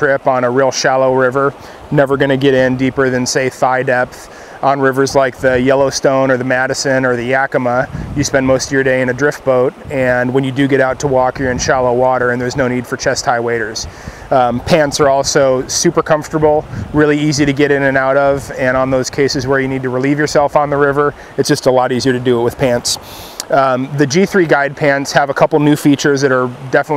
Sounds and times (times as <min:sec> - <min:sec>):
Speech: 0:00.0 - 0:26.9.